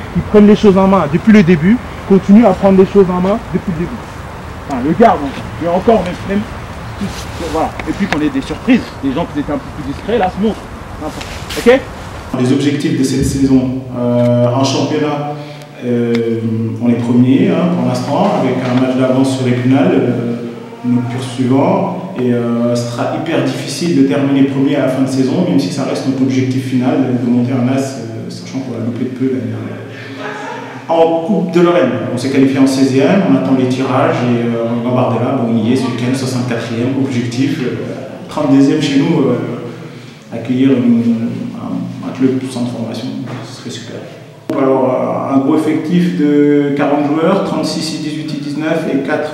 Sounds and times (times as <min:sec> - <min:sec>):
Speech: 0:00.0 - 0:04.0, 0:04.7 - 0:49.3.